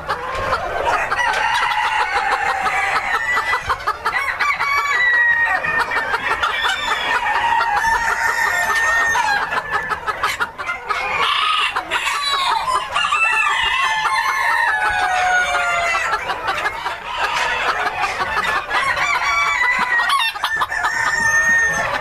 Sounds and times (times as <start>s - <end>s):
Cluck: 0.0s - 22.0s
Crowing, cock-a-doodle-doo: 0.9s - 3.4s, 4.1s - 5.8s, 6.4s - 9.6s, 11.2s - 16.1s, 18.7s - 22.0s.